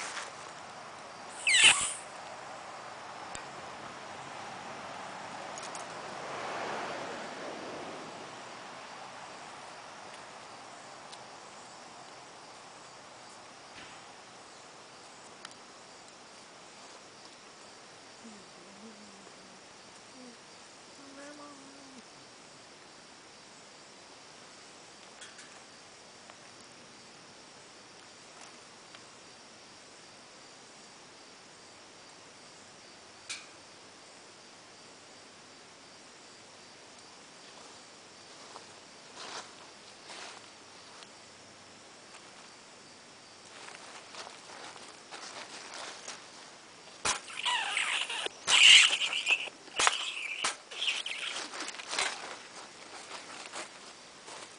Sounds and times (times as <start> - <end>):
Cricket: 0.0 - 54.5
Patter: 47.0 - 54.5.